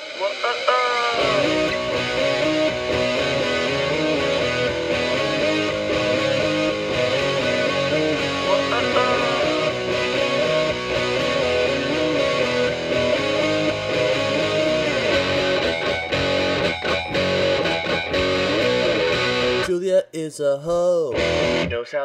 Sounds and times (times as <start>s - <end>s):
Happy music: 0.1s - 21.9s.